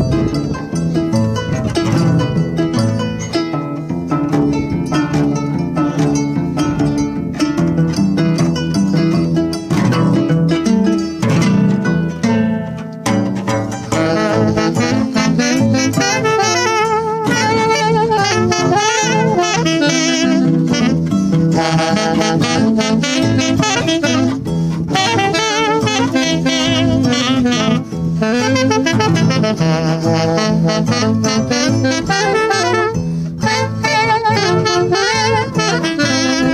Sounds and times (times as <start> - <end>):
Jazz: 0.0 - 36.5
Musical instrument: 0.0 - 36.5.